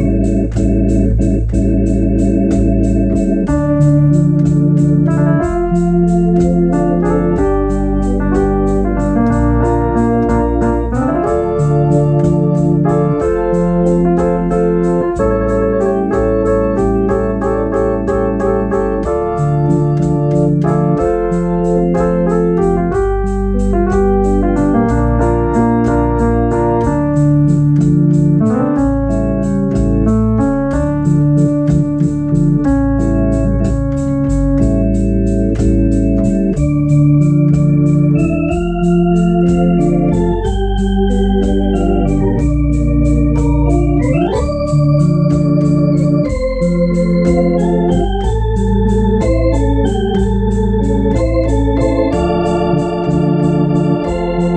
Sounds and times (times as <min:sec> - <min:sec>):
Hammond organ: 0:00.0 - 0:54.5.